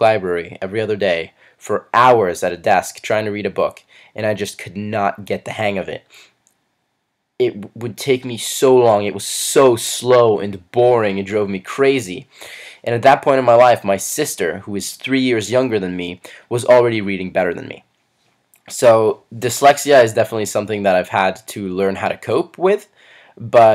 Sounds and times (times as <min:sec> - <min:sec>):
Speech: 0:00.0 - 0:06.1, 0:07.4 - 0:17.9, 0:18.6 - 0:23.7.